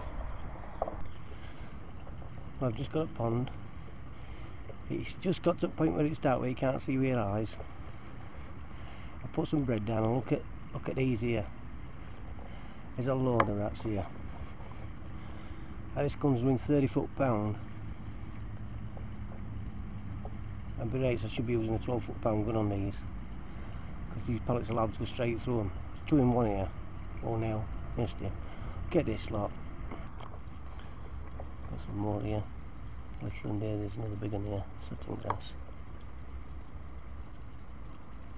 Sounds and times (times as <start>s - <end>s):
Speech: 2.6s - 3.6s, 4.9s - 7.6s, 9.2s - 11.5s, 13.0s - 14.2s, 16.0s - 17.6s, 20.8s - 23.1s, 24.1s - 29.6s, 31.7s - 32.5s, 33.2s - 35.6s.